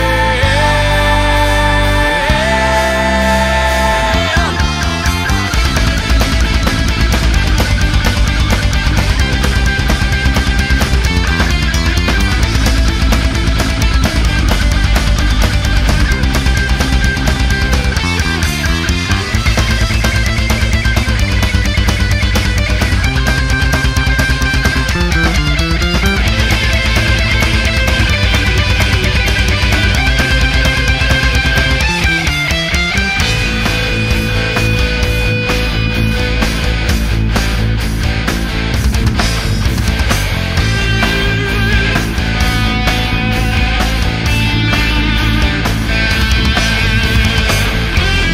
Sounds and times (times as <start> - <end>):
Heavy metal: 0.0 - 48.3
Progressive rock: 0.0 - 48.3.